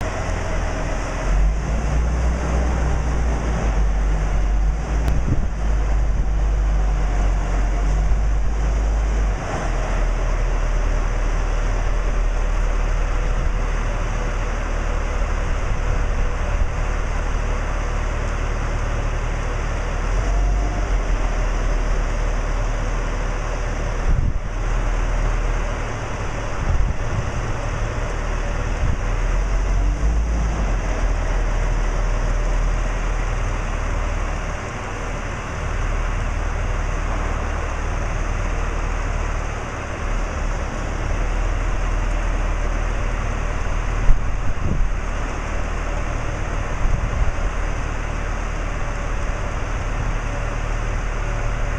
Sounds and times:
Vehicle: 0.0s - 51.7s.

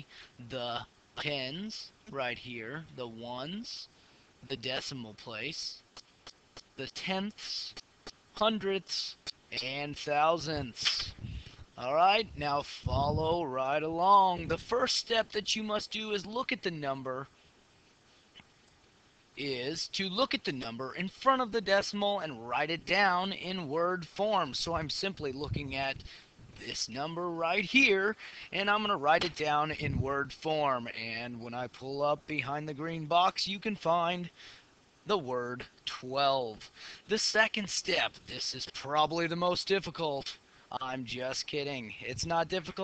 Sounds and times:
Speech: 0.0s - 6.0s, 6.6s - 11.2s, 11.8s - 17.3s, 19.4s - 34.4s, 35.0s - 42.8s.

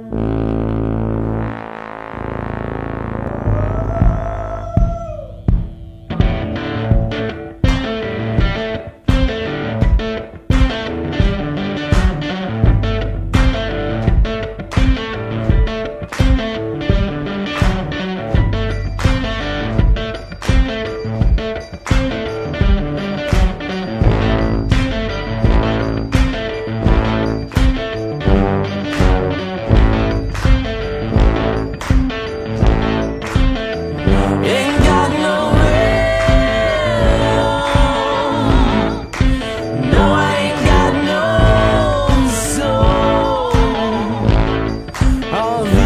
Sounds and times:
Independent music: 0.0s - 45.8s.

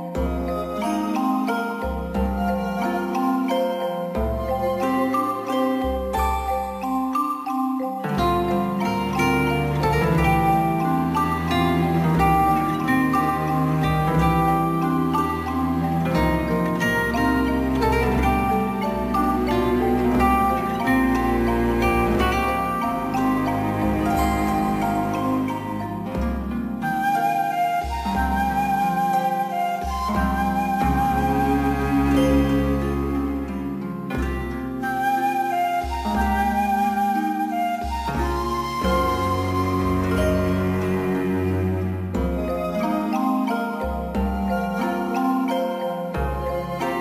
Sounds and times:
Glockenspiel: 0.0s - 47.0s
Marimba, xylophone: 0.0s - 47.0s.

